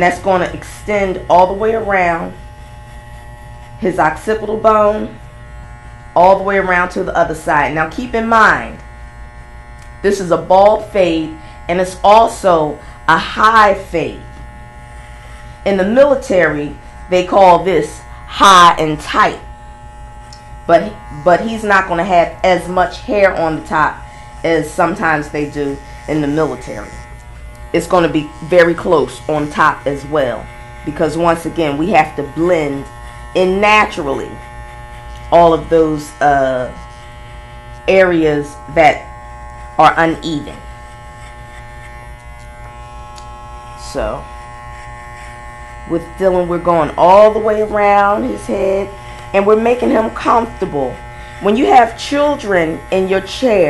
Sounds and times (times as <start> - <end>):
Speech: 0.0 - 2.4, 3.8 - 5.2, 6.2 - 8.8, 10.0 - 14.3, 15.7 - 19.5, 20.7 - 27.0, 27.7 - 34.4, 35.3 - 36.8, 37.9 - 39.1, 39.8 - 40.7, 43.8 - 44.3, 45.9 - 53.7
Electric shaver, electric razor: 0.0 - 53.7.